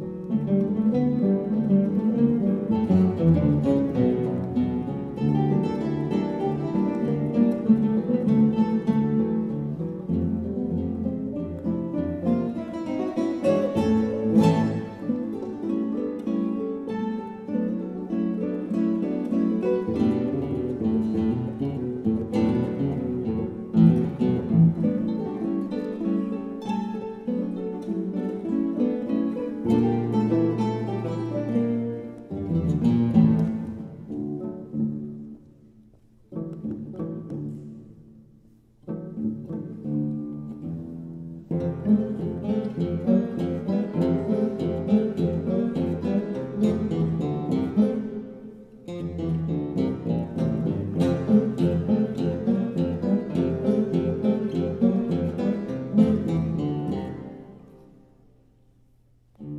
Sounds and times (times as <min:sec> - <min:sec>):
Acoustic guitar: 0:00.0 - 0:59.5
Strum: 0:00.0 - 0:59.5.